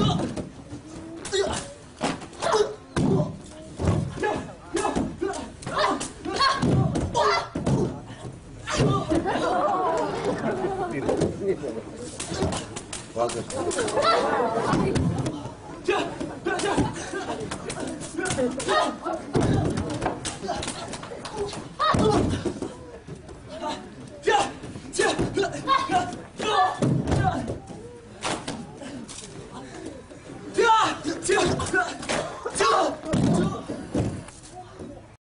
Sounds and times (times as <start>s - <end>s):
Inside, large room or hall: 0.0s - 35.2s.